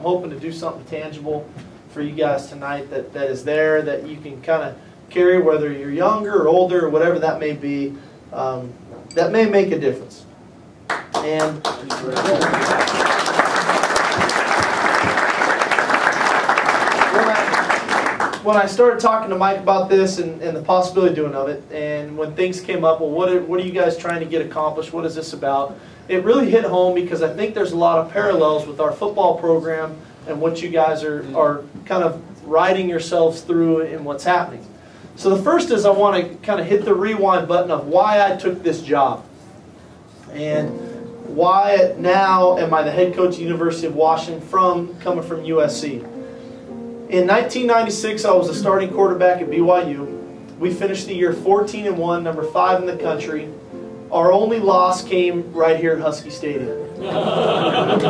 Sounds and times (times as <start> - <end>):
Male speech, man speaking: 0.0 - 10.3, 11.2 - 12.6, 17.1 - 17.6, 18.4 - 39.3, 40.3 - 46.1, 47.1 - 53.5, 54.1 - 56.8
Narration, monologue: 0.0 - 12.8, 17.0 - 57.0.